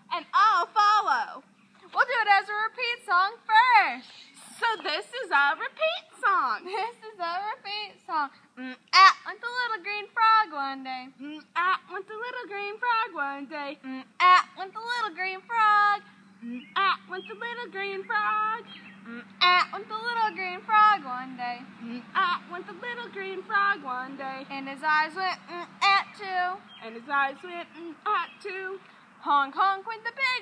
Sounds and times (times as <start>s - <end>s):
Speech: 0.1s - 8.8s.